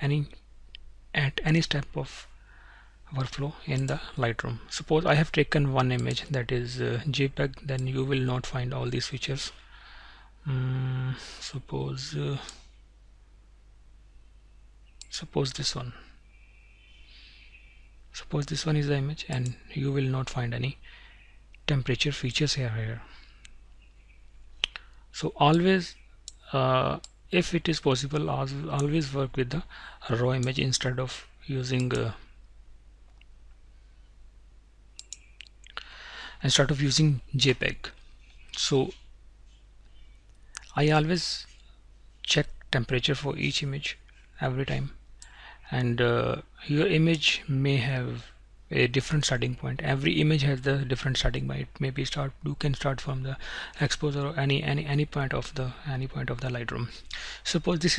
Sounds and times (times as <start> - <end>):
Speech: 0.0 - 0.4, 1.2 - 2.3, 3.1 - 9.6, 10.5 - 12.6, 15.1 - 16.1, 18.2 - 20.8, 21.7 - 23.1, 25.2 - 32.3, 36.4 - 38.0, 38.6 - 39.0, 40.6 - 41.6, 42.3 - 45.0, 45.7 - 57.9
Inside, small room: 0.0 - 57.9.